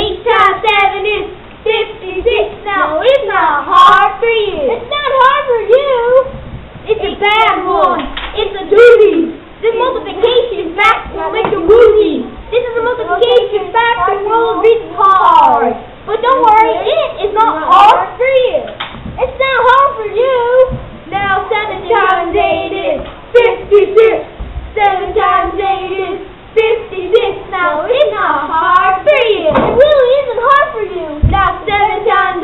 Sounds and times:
Child speech, kid speaking: 0:00.0 - 0:24.3, 0:26.6 - 0:32.4
Child singing: 0:00.0 - 0:32.4.

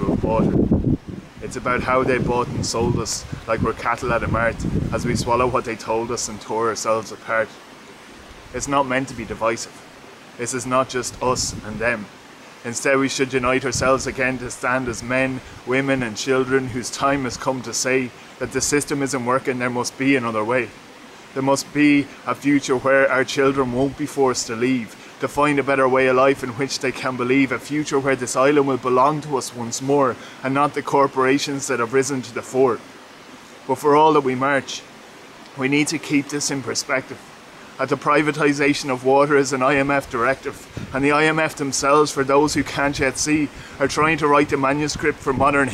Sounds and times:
Speech: 0:00.0 - 0:00.6, 0:01.4 - 0:07.6, 0:08.6 - 0:09.8, 0:10.4 - 0:20.8, 0:21.4 - 0:32.8, 0:33.7 - 0:34.9, 0:35.6 - 0:37.2, 0:37.8 - 0:45.7.

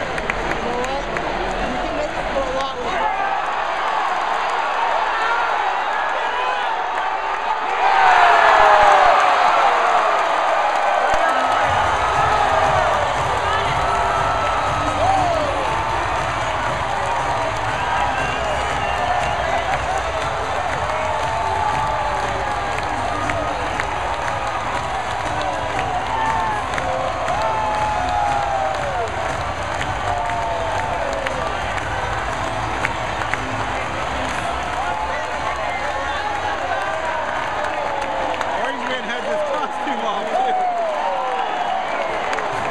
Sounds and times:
Speech: 0:38.6 - 0:40.7.

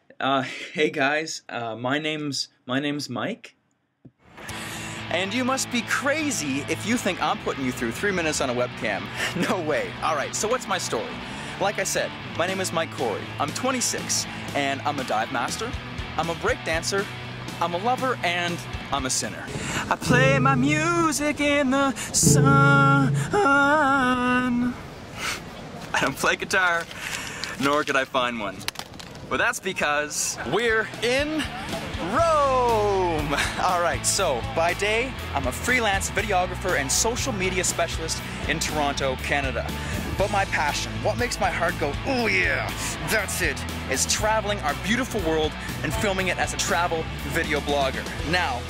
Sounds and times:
Speech: 0:00.1 - 0:03.6, 0:05.0 - 0:21.6, 0:25.9 - 0:26.9, 0:27.6 - 0:28.6, 0:29.3 - 0:48.7
Music: 0:04.3 - 0:23.9, 0:30.9 - 0:48.7.

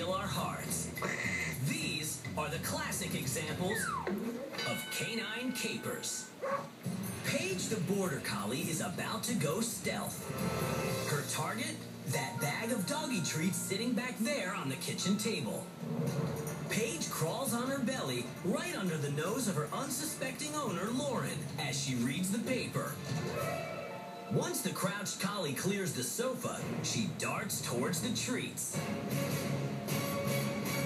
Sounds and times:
Music: 0:00.0 - 0:04.6, 0:06.1 - 0:30.8
Speech: 0:00.0 - 0:06.3, 0:07.2 - 0:10.3, 0:11.0 - 0:15.7, 0:16.7 - 0:23.0, 0:24.3 - 0:28.8.

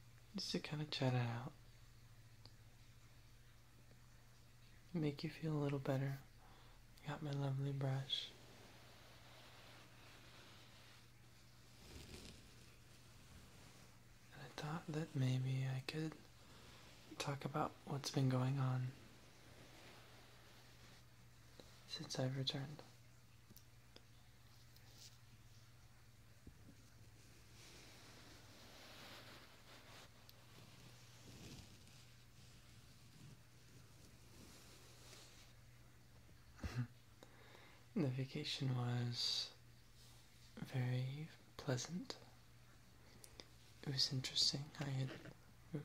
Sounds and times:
Male speech, man speaking: 0:00.4 - 0:01.6, 0:04.9 - 0:06.3, 0:07.0 - 0:08.3, 0:14.3 - 0:16.2, 0:17.2 - 0:19.0, 0:21.9 - 0:22.9, 0:38.0 - 0:39.6, 0:40.6 - 0:42.2, 0:43.8 - 0:45.8.

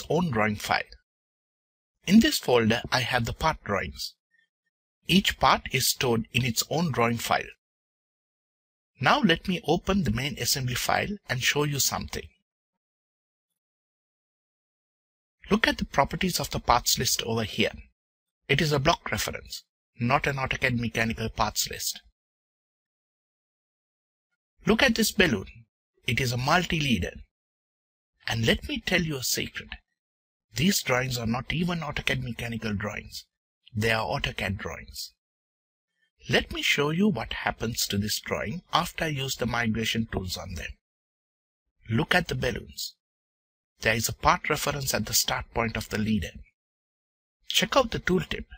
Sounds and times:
Speech: 0:00.0 - 0:01.0, 0:02.0 - 0:04.2, 0:05.1 - 0:07.6, 0:09.0 - 0:12.4, 0:15.4 - 0:17.9, 0:18.5 - 0:22.1, 0:24.6 - 0:27.3, 0:28.2 - 0:29.8, 0:30.6 - 0:35.2, 0:36.2 - 0:40.8, 0:41.9 - 0:43.0, 0:43.8 - 0:46.5, 0:47.5 - 0:48.5.

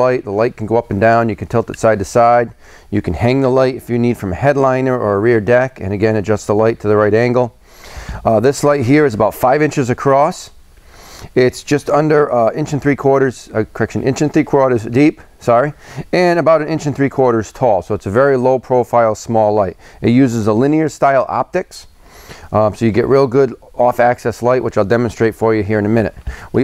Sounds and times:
Speech: 0:00.0 - 0:07.6, 0:08.2 - 0:10.6, 0:11.3 - 0:21.9, 0:22.5 - 0:26.6.

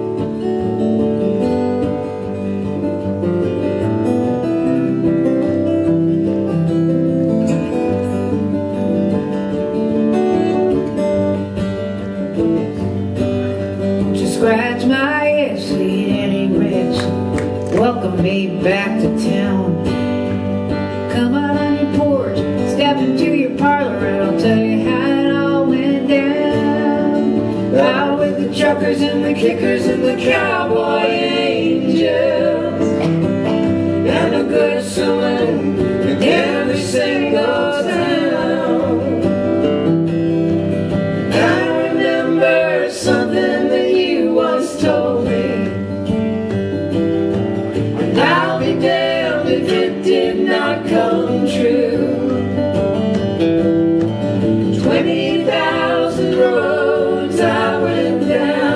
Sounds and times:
Music: 0:00.0 - 0:58.7.

